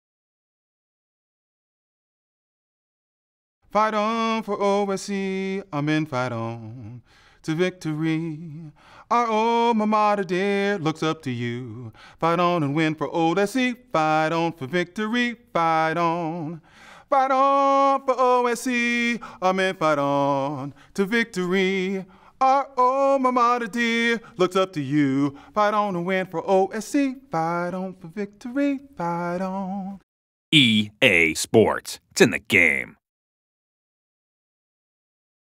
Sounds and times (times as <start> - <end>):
Male singing: 3.7 - 30.0
Speech: 30.6 - 33.0.